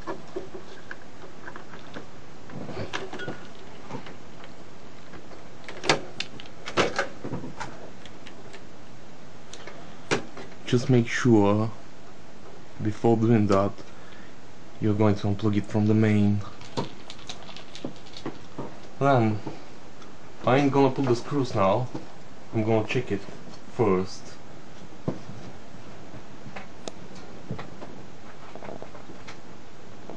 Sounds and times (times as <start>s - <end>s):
Inside, small room: 0.0s - 30.1s
Speech: 10.6s - 11.8s, 12.8s - 13.8s, 14.8s - 16.6s, 19.0s - 19.5s, 20.4s - 24.4s.